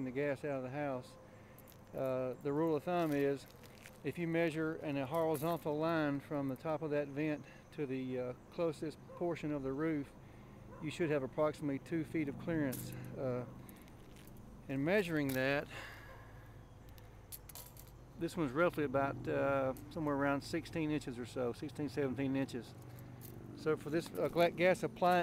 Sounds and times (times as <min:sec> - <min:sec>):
Speech: 0:00.0 - 0:01.2, 0:02.0 - 0:10.1, 0:10.8 - 0:13.5, 0:14.7 - 0:15.7, 0:18.2 - 0:22.7, 0:23.6 - 0:25.2.